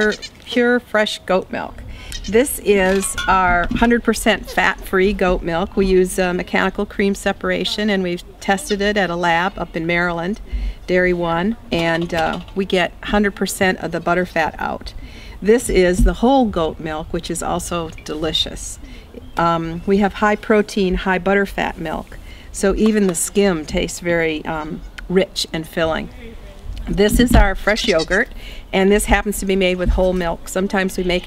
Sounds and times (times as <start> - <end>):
Speech: 0.0 - 18.8, 19.4 - 31.2.